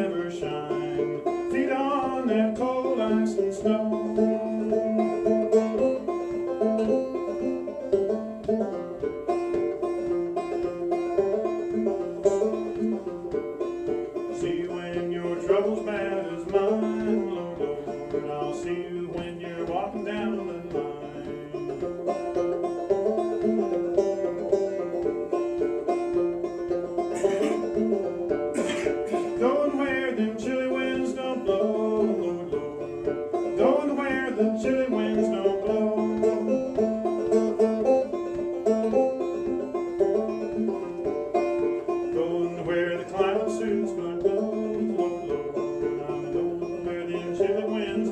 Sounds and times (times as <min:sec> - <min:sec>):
Banjo: 0:00.0 - 0:48.1.